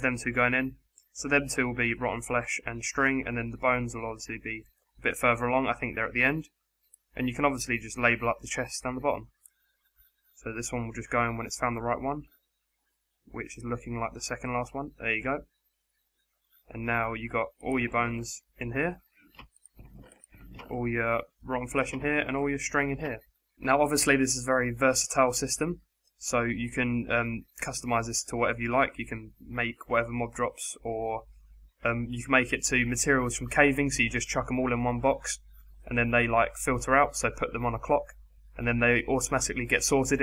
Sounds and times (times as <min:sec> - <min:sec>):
Speech: 0:00.0 - 0:09.3, 0:10.4 - 0:12.3, 0:13.3 - 0:15.5, 0:16.7 - 0:19.0, 0:20.6 - 0:40.2.